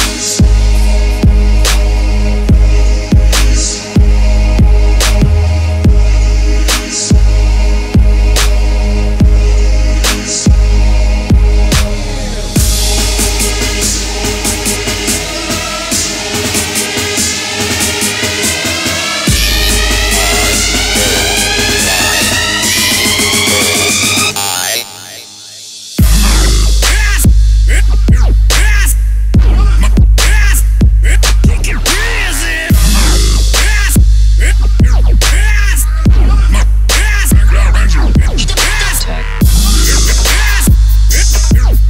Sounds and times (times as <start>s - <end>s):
Music: 0.0s - 41.8s.